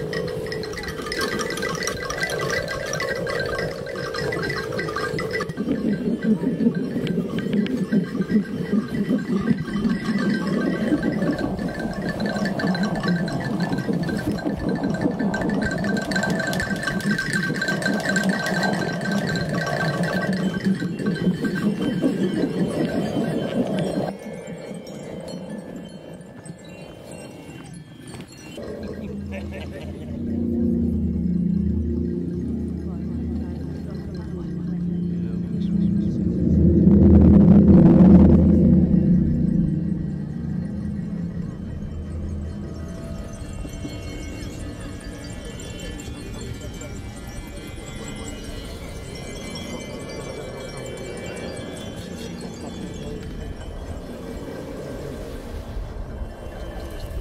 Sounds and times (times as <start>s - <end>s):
Throbbing: 0.0s - 26.9s, 28.3s - 57.2s
Hum: 0.0s - 27.0s, 28.5s - 57.2s.